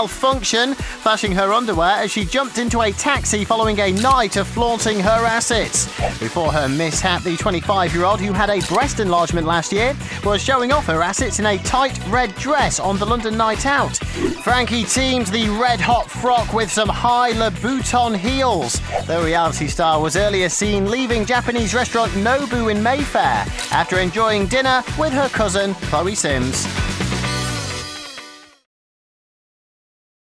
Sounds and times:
Speech: 0:00.0 - 0:26.7
Music: 0:00.0 - 0:28.7.

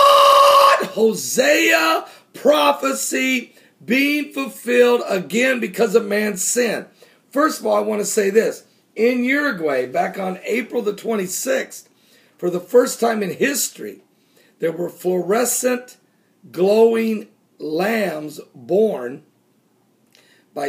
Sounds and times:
Speech: 0:00.8 - 0:14.0, 0:14.6 - 0:19.3.

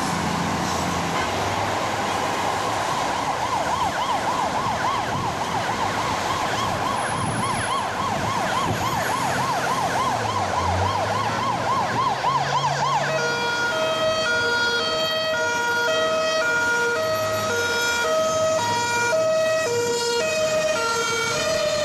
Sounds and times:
Ambulance (siren): 0:00.0 - 0:21.8.

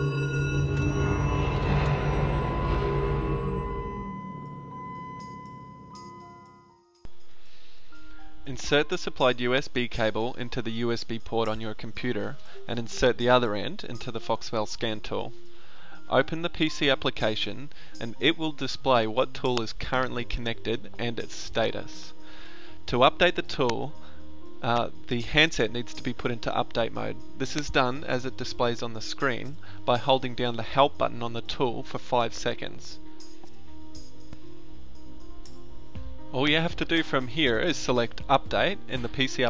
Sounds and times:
Music: 0:00.0 - 0:39.5
Speech: 0:08.5 - 0:15.3, 0:16.1 - 0:22.1, 0:22.9 - 0:23.9, 0:24.6 - 0:33.0, 0:36.4 - 0:39.5.

